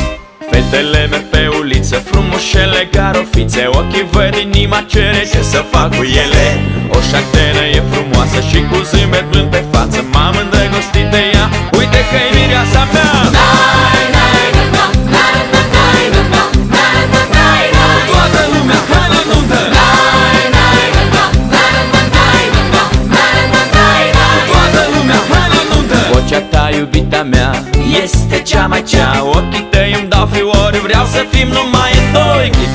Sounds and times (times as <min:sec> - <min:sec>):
Music: 0:00.0 - 0:32.7.